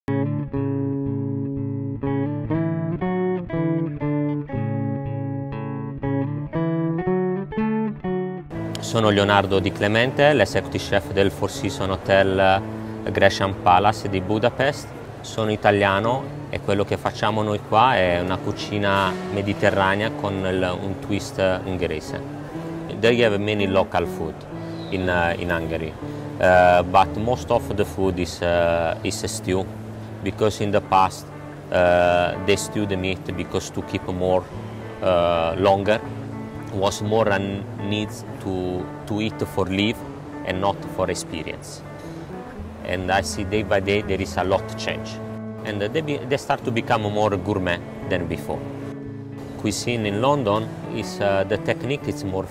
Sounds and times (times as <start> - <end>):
Bass guitar: 0.0 - 14.0
Speech: 8.8 - 22.3, 22.9 - 34.4, 35.0 - 36.0, 36.7 - 41.8, 42.8 - 48.6, 49.6 - 52.5.